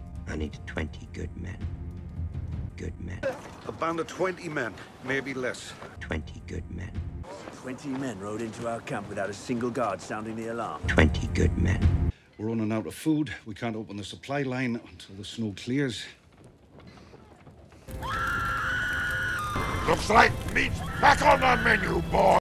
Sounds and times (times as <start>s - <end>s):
Music: 0.0s - 3.3s, 6.0s - 7.3s, 10.8s - 12.2s, 17.9s - 22.4s
Speech: 0.3s - 1.6s, 2.8s - 16.2s, 19.9s - 22.4s.